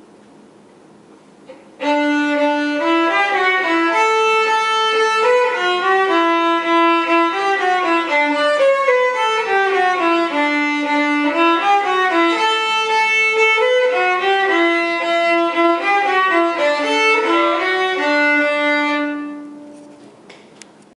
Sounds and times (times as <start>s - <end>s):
Violin, fiddle: 1.8s - 19.8s.